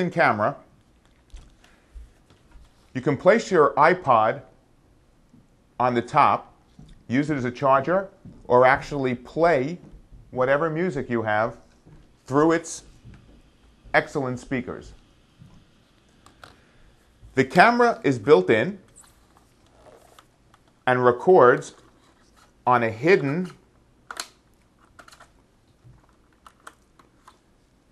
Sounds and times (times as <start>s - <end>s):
Speech: 0.0s - 0.7s, 3.0s - 4.5s, 5.8s - 6.5s, 7.1s - 9.8s, 10.4s - 11.6s, 12.3s - 12.9s, 14.0s - 15.0s, 17.4s - 18.9s, 20.9s - 21.8s, 22.7s - 23.6s.